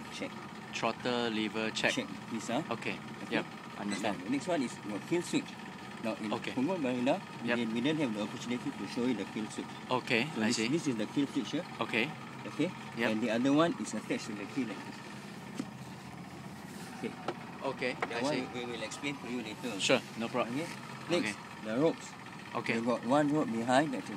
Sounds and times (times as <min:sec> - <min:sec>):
Motorboat, speedboat: 0:00.0 - 0:24.1.